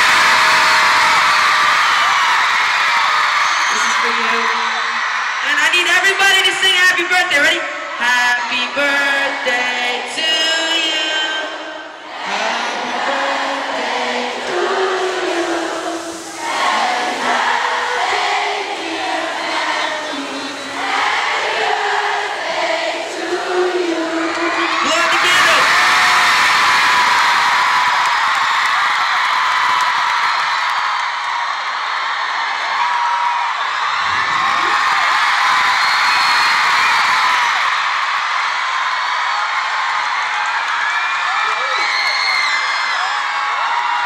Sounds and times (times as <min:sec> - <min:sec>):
Female singing: 0:08.0 - 0:16.0, 0:16.8 - 0:22.5, 0:23.1 - 0:25.0.